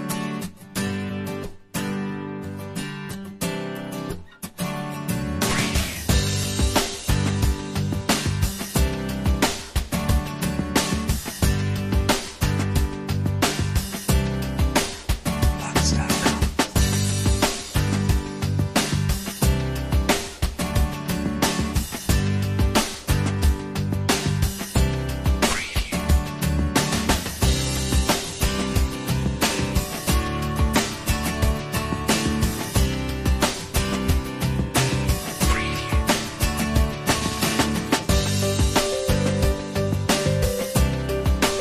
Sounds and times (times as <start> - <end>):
Pop music: 5.1 - 41.6.